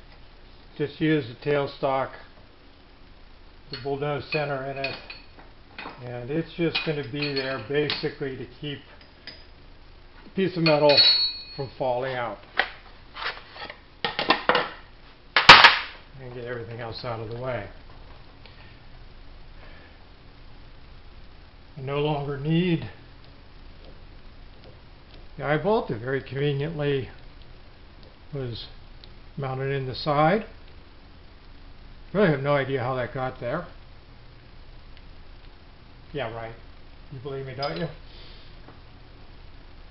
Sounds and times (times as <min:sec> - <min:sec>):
Speech: 0:00.8 - 0:02.3, 0:03.7 - 0:05.1, 0:06.0 - 0:09.0, 0:10.4 - 0:11.0, 0:11.6 - 0:12.4, 0:16.1 - 0:17.8, 0:21.8 - 0:23.0, 0:25.4 - 0:27.2, 0:28.3 - 0:28.8, 0:29.4 - 0:30.6, 0:32.1 - 0:33.8, 0:36.1 - 0:38.0.